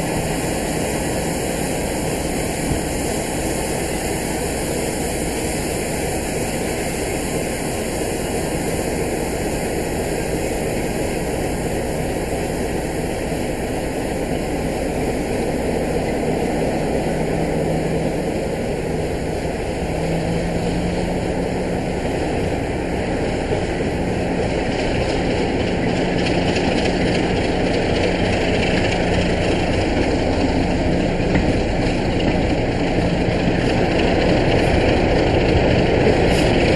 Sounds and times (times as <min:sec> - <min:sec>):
Heavy engine (low frequency): 0:00.0 - 0:36.7
Vehicle: 0:00.0 - 0:36.7.